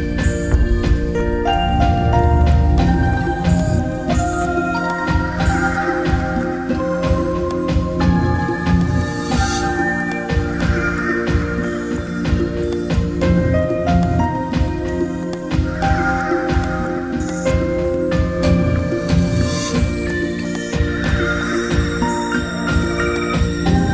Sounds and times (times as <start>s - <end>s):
Background music: 0.0s - 23.9s.